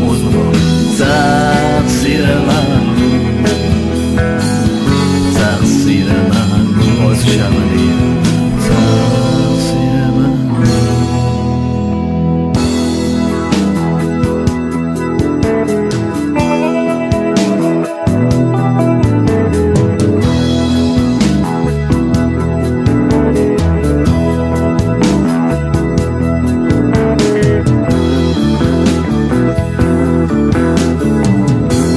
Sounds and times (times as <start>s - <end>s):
Singing: 0.0s - 3.8s, 5.2s - 11.1s
Independent music: 0.0s - 31.9s.